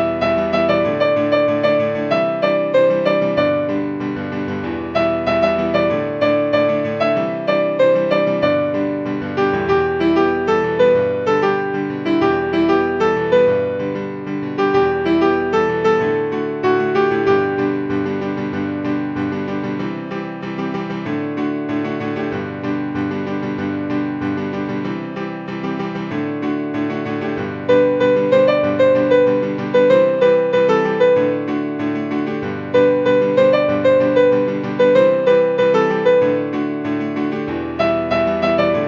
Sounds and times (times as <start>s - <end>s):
Music: 0.0s - 38.8s.